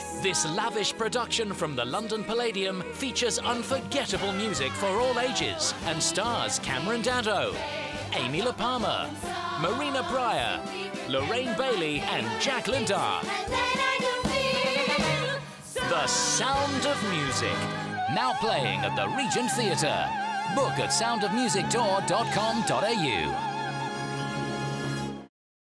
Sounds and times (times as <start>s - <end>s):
Exciting music: 0.0s - 25.3s
Speech: 0.2s - 7.6s, 8.2s - 13.3s, 15.8s - 23.4s.